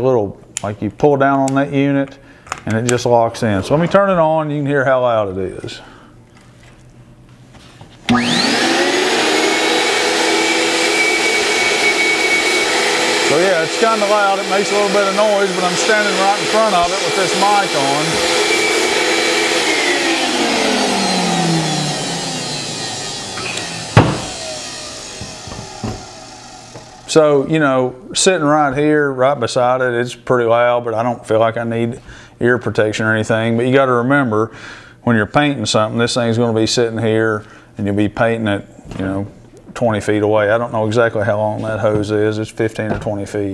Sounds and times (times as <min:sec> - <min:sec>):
Speech: 0:00.0 - 0:05.9, 0:13.3 - 0:18.2, 0:27.1 - 0:43.5.